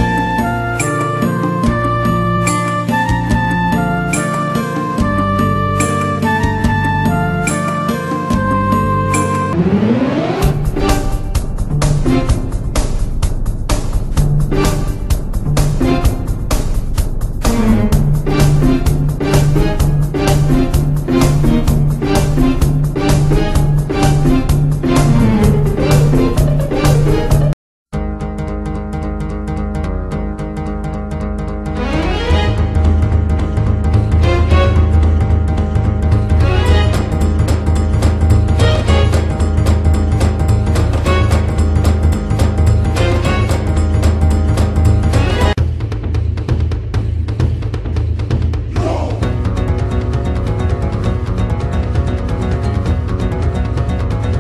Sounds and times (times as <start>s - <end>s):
Exciting music: 0.0s - 54.4s.